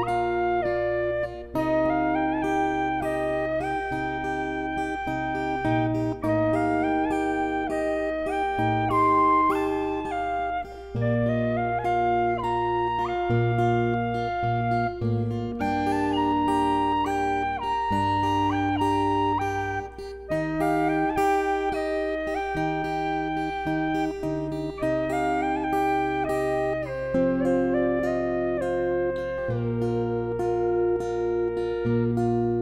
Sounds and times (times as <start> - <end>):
Acoustic guitar: 0.0 - 32.6
Electric guitar: 0.0 - 32.6
Strum: 0.0 - 32.6.